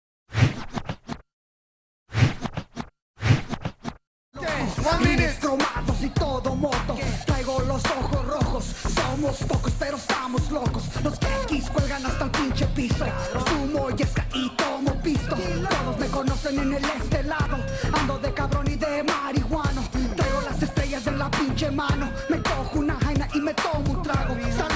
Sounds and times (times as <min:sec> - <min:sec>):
Music: 0:04.4 - 0:24.7.